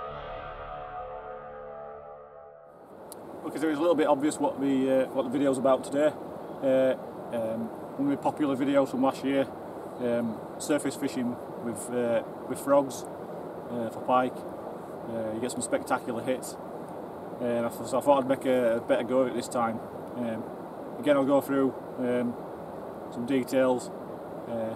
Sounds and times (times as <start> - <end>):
Speech: 3.4 - 13.1, 13.7 - 14.4, 15.1 - 16.6, 17.4 - 22.4, 23.1 - 23.9, 24.5 - 24.7.